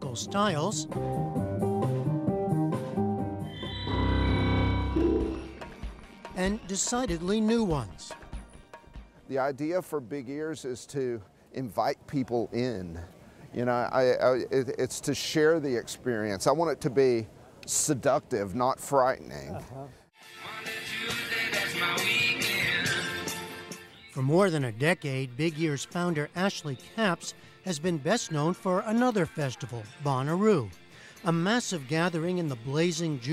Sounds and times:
Speech: 0.0s - 0.8s, 6.4s - 8.1s, 9.3s - 20.0s, 24.2s - 30.7s, 31.3s - 33.3s
Music: 0.0s - 9.6s, 20.2s - 33.3s.

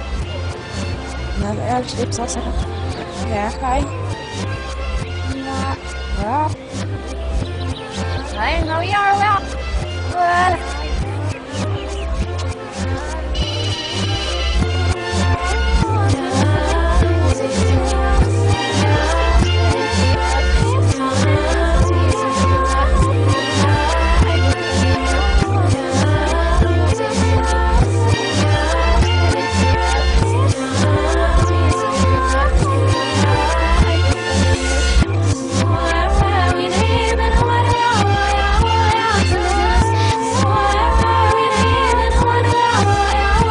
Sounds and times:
Pop music: 0.0s - 43.5s.

